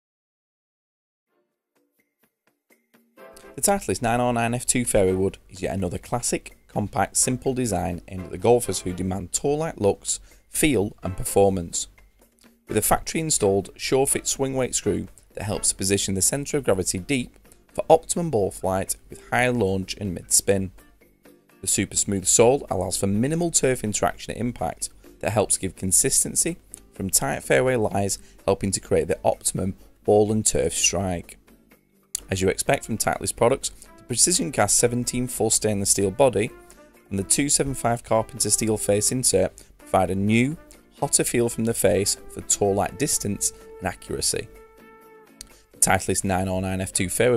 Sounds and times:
Music: 1.3 - 47.3
Speech: 3.6 - 11.9, 12.7 - 20.8, 21.6 - 31.4, 32.2 - 36.5, 37.1 - 44.5, 45.8 - 47.3.

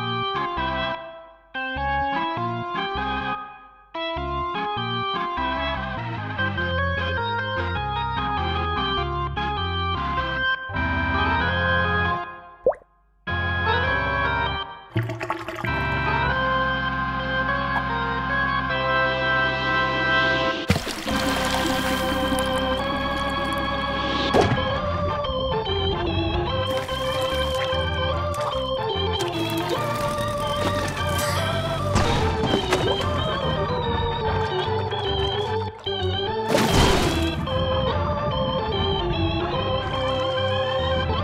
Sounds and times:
Music: 0.0 - 41.2.

